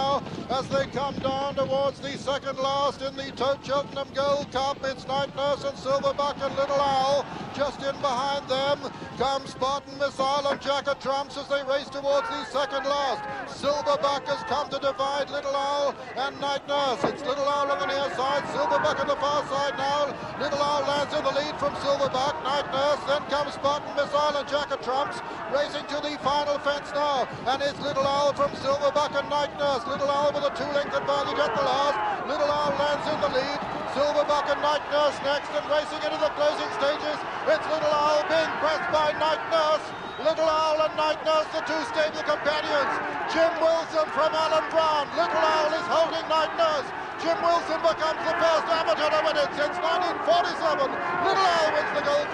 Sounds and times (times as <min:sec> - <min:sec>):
Speech: 0:00.0 - 0:52.3.